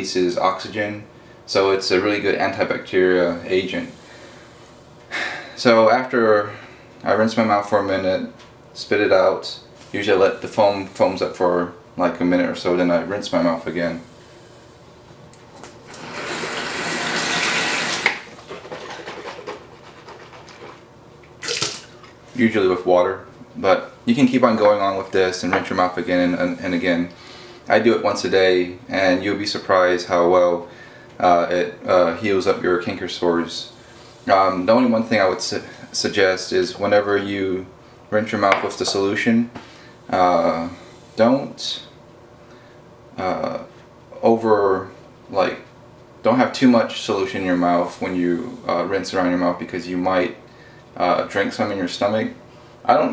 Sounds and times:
Water tap, faucet: 15.9s - 18.3s
Sink (filling or washing): 15.9s - 18.8s.

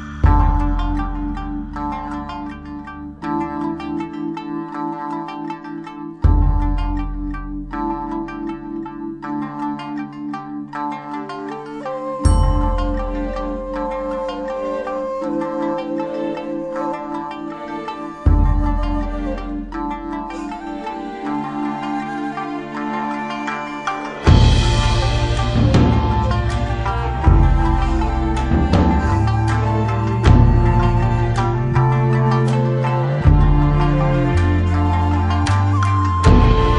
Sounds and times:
Music: 0.0s - 36.7s.

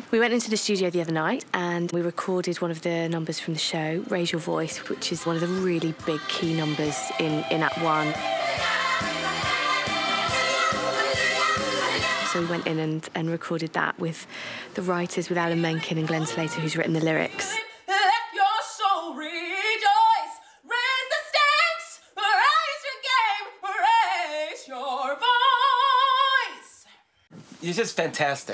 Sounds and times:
Music: 4.0s - 12.8s.

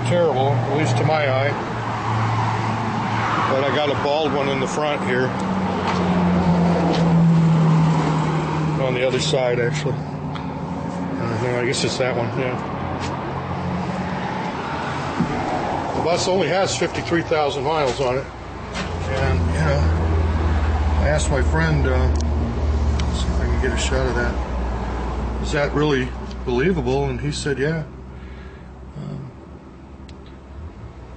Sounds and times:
Speech: 0.0s - 1.6s, 3.5s - 5.3s, 8.8s - 10.0s, 11.2s - 12.6s, 16.0s - 18.3s, 19.0s - 20.0s, 21.0s - 22.2s, 23.1s - 24.4s, 25.4s - 27.9s, 29.0s - 29.4s
Outside, urban or manmade: 0.0s - 31.1s.

